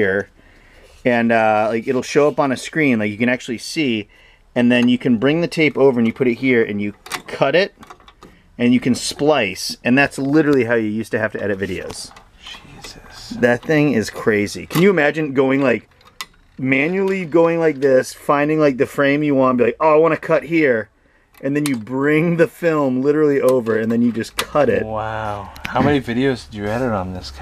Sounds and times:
Speech: 0.0s - 0.3s, 1.0s - 7.8s, 8.6s - 15.8s, 16.6s - 27.4s
Inside, small room: 0.0s - 27.4s.

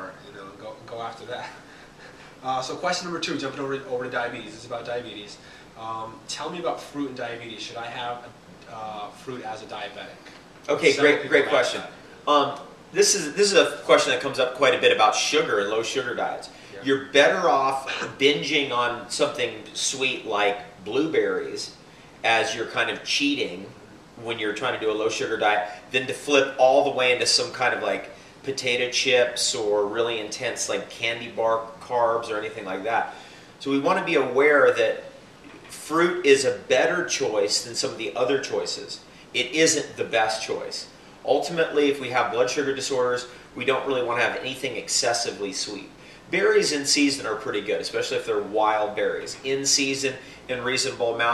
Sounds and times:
Speech: 0.0s - 1.6s, 2.4s - 51.3s
Inside, small room: 0.0s - 51.3s.

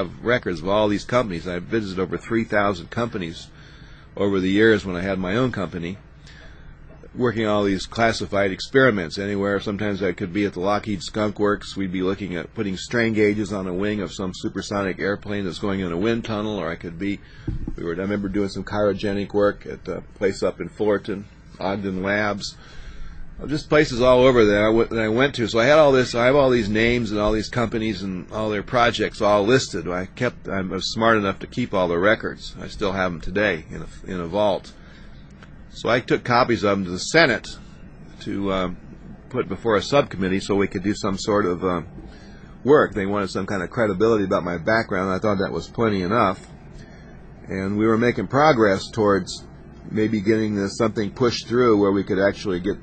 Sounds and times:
Speech: 0.0s - 3.6s, 4.2s - 6.1s, 6.9s - 22.6s, 23.4s - 34.8s, 35.7s - 41.9s, 42.6s - 46.6s, 47.4s - 52.8s.

